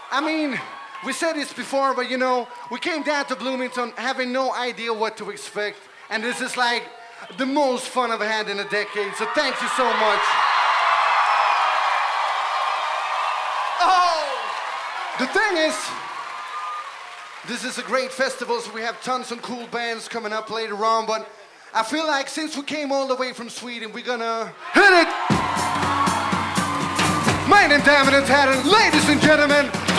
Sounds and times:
Speech: 0:00.1 - 0:10.3, 0:13.8 - 0:14.4, 0:15.2 - 0:16.0, 0:17.5 - 0:25.1, 0:27.5 - 0:29.9.

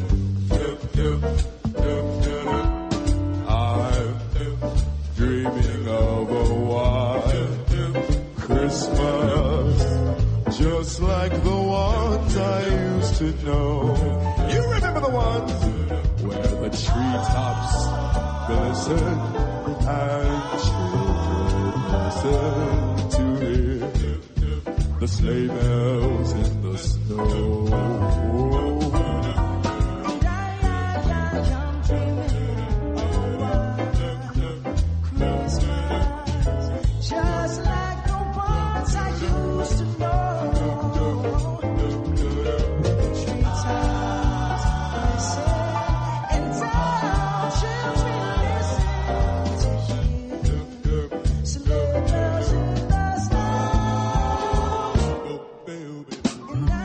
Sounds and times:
Choir: 0:00.0 - 0:56.8
Male singing: 0:00.0 - 0:56.8.

